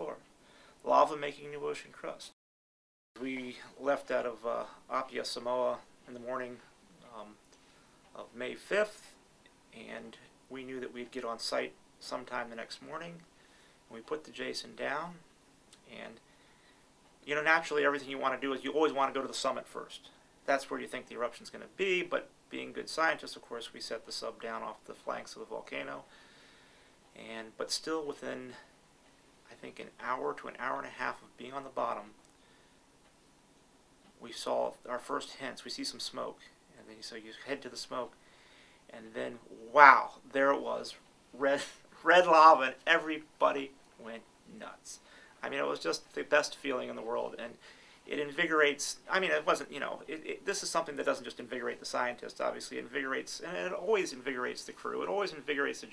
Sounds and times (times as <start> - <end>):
Speech: 0.0 - 0.2, 0.8 - 2.4, 3.2 - 7.4, 8.1 - 13.3, 13.9 - 16.2, 17.2 - 26.1, 27.2 - 28.7, 29.5 - 32.2, 34.2 - 38.2, 38.9 - 55.9.